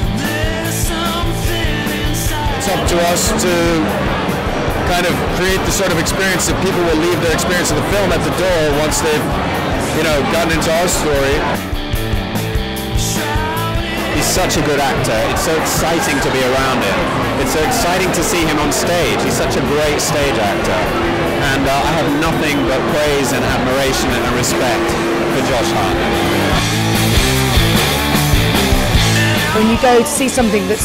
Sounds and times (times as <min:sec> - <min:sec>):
Music: 0:00.0 - 0:30.8
Speech: 0:04.9 - 0:09.2, 0:10.0 - 0:11.4, 0:14.2 - 0:26.0, 0:29.6 - 0:30.8.